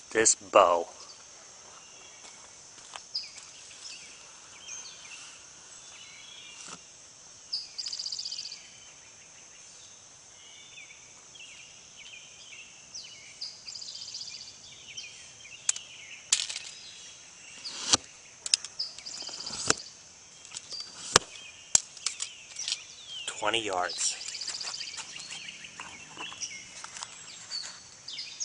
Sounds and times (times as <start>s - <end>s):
Speech: 0.1s - 1.0s, 23.3s - 24.3s.